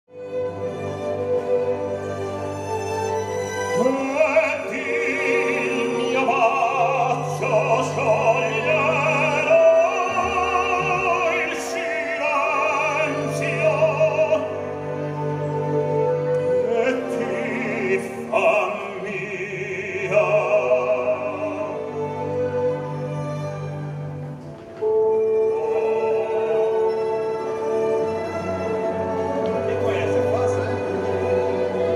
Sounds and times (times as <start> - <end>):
Opera: 0.1 - 31.9
Orchestra: 0.1 - 31.9.